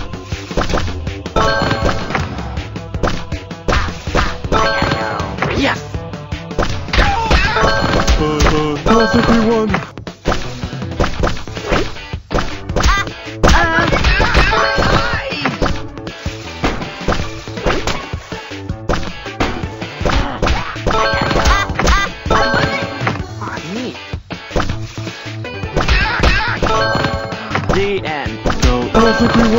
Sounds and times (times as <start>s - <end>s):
Whack, thwack: 3.0s - 4.4s, 6.6s - 8.7s, 9.7s - 15.9s, 16.6s - 18.2s, 18.9s - 22.1s, 24.6s - 24.8s, 25.7s - 26.7s, 27.6s - 28.8s.